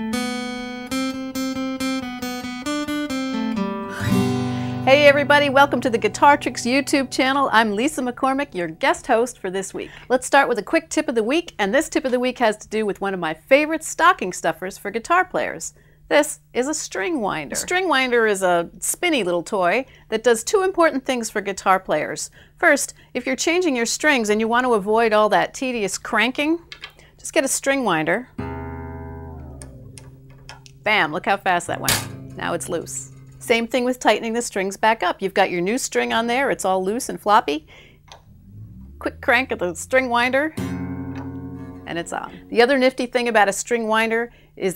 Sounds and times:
Music: 0.0 - 9.4, 28.3 - 34.1, 38.2 - 43.3
Speech: 4.9 - 26.6, 27.2 - 28.3, 30.9 - 37.7, 39.0 - 40.5, 41.9 - 44.7.

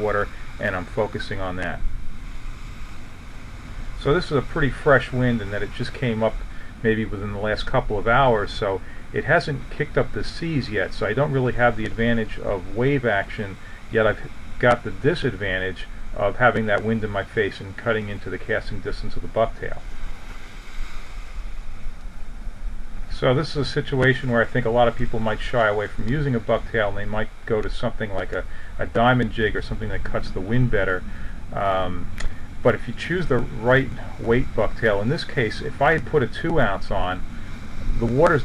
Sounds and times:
Waves, surf: 0.0 - 38.4.

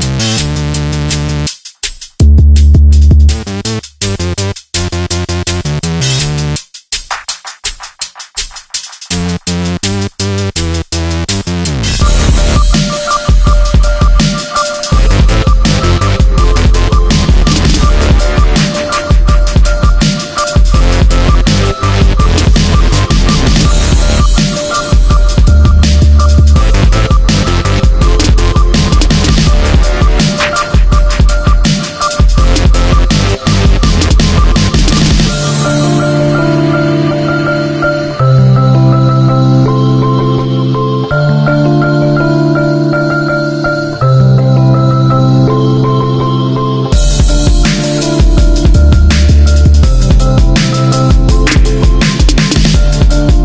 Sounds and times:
Music: 0.0 - 53.4.

